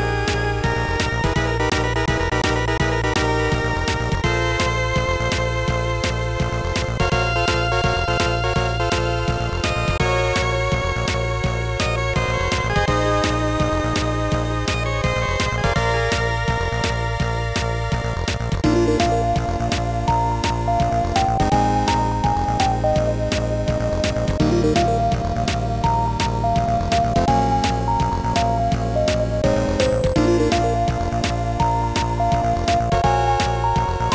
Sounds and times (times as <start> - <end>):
Music: 0.0 - 34.1.